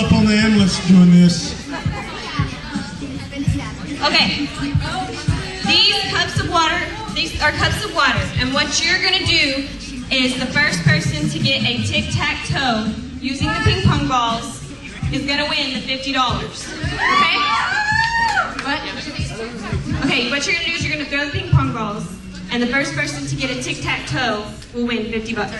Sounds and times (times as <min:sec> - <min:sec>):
Music: 0:00.0 - 0:25.5
Speech: 0:10.1 - 0:14.4.